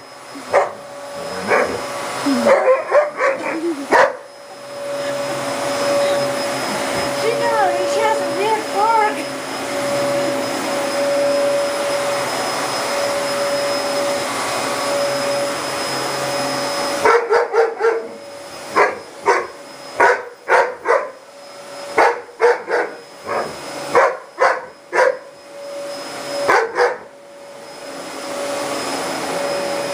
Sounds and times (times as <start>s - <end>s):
Vacuum cleaner: 0.0s - 29.9s
Bark: 0.5s - 0.8s, 1.4s - 1.8s, 2.5s - 4.2s, 17.0s - 18.2s, 18.8s - 21.2s, 22.0s - 25.3s, 26.5s - 27.1s
Speech: 7.2s - 9.3s.